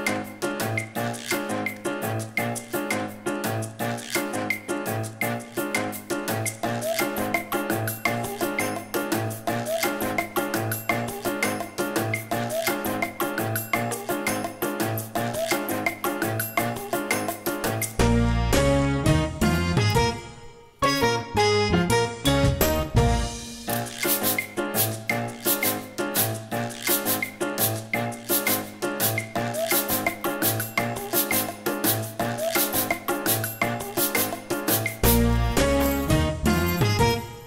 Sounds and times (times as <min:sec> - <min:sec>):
Percussion: 0:00.0 - 0:37.4.